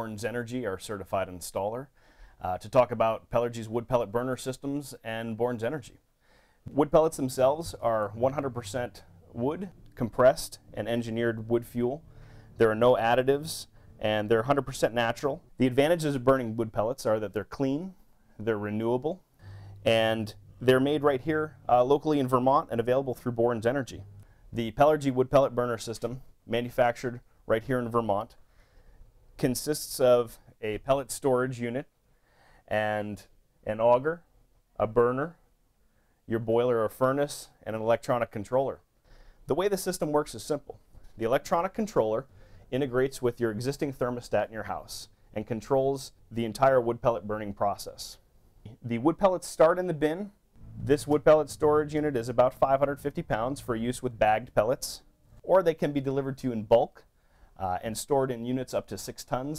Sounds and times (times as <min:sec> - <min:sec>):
Speech: 0:00.0 - 0:06.0, 0:06.7 - 0:12.0, 0:12.6 - 0:19.2, 0:19.8 - 0:28.4, 0:29.4 - 0:31.9, 0:32.7 - 0:35.4, 0:36.3 - 0:38.9, 0:39.5 - 0:59.5.